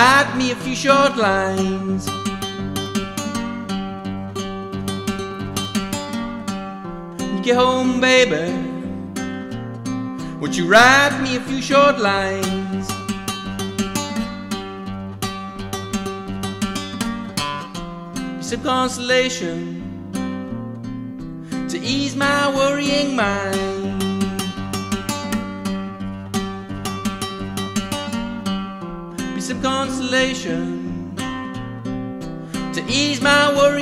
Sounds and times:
Guitar: 0:00.0 - 0:33.8.

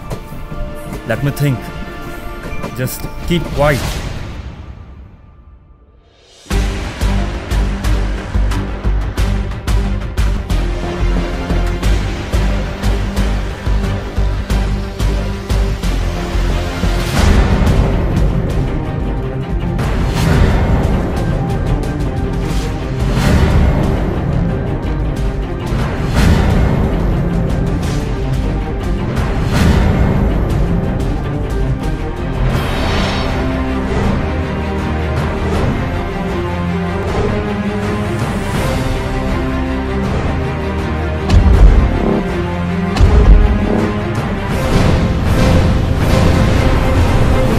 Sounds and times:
Music: 0:00.0 - 0:47.5
Speech: 0:01.1 - 0:01.7, 0:02.7 - 0:03.9.

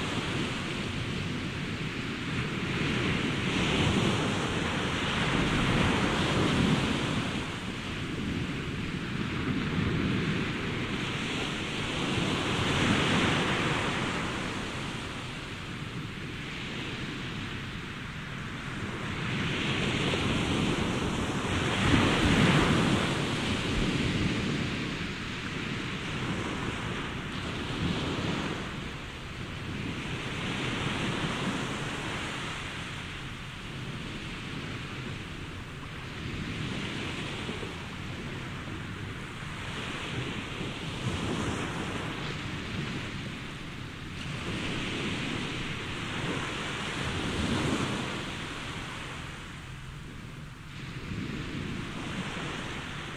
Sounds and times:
Waves, surf: 0:00.0 - 0:53.1.

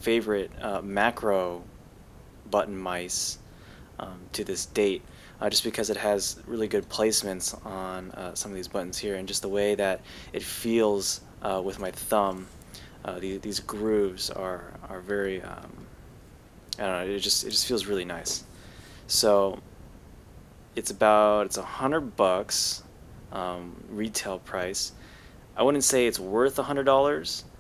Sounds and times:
Speech: 0:00.0 - 0:01.7, 0:02.5 - 0:03.4, 0:04.0 - 0:15.9, 0:16.8 - 0:18.5, 0:19.1 - 0:19.6, 0:20.8 - 0:25.0, 0:25.6 - 0:27.5.

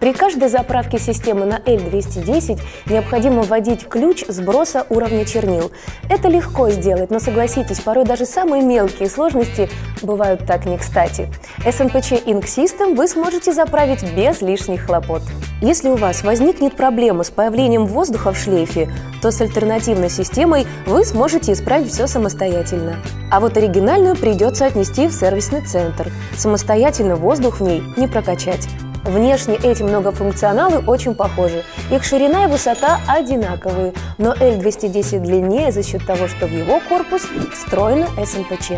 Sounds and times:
Music: 0:00.0 - 0:38.7
Speech: 0:00.0 - 0:38.7.

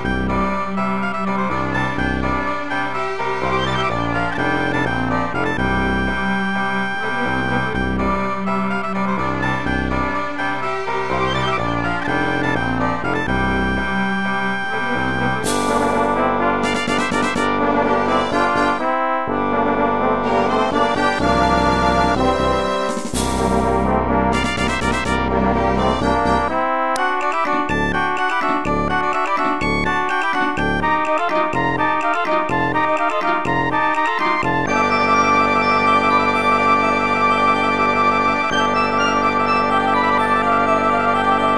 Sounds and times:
Music: 0:00.0 - 0:41.5.

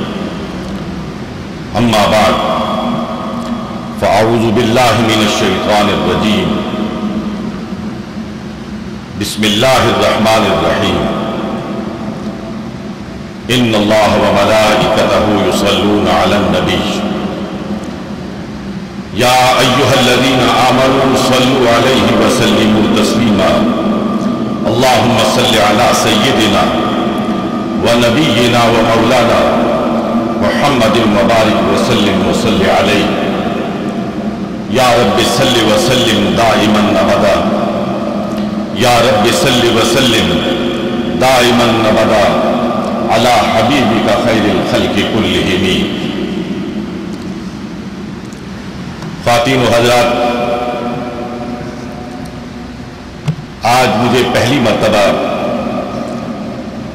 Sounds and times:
Narration, monologue: 0:00.0 - 0:56.9
Male speech, man speaking: 0:01.8 - 0:02.8, 0:04.0 - 0:06.7, 0:09.2 - 0:11.2, 0:13.5 - 0:17.1, 0:19.2 - 0:23.8, 0:24.6 - 0:26.9, 0:27.8 - 0:29.7, 0:30.4 - 0:33.4, 0:34.7 - 0:37.6, 0:38.8 - 0:40.6, 0:41.2 - 0:42.5, 0:43.1 - 0:46.0, 0:49.2 - 0:50.6, 0:53.6 - 0:55.6.

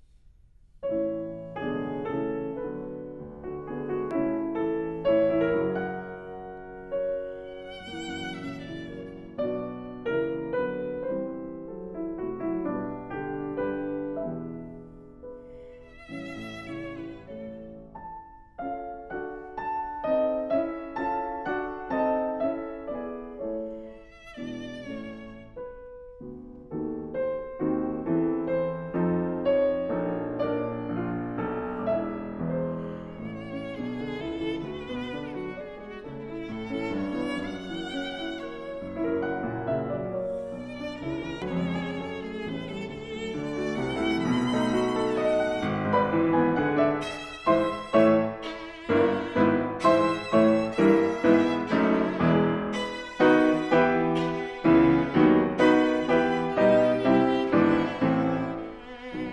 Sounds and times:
Violin, fiddle: 0:04.6 - 0:10.5, 0:15.4 - 0:18.0, 0:19.2 - 0:26.1, 0:29.8 - 0:59.3.

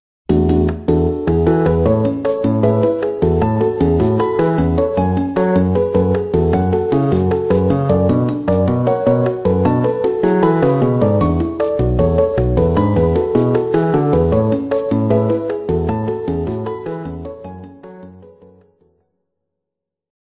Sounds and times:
Music: 0:00.3 - 0:19.3.

